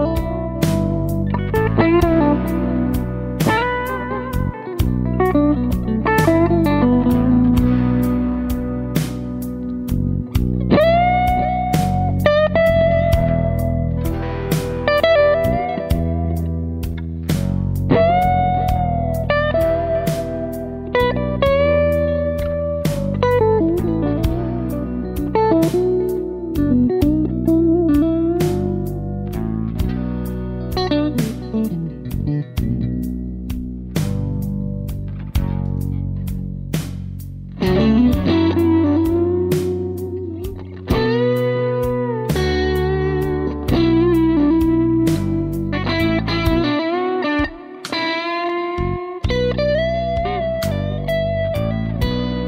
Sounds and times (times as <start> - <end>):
Bass guitar: 0.0 - 52.4
Inside, small room: 0.0 - 52.4.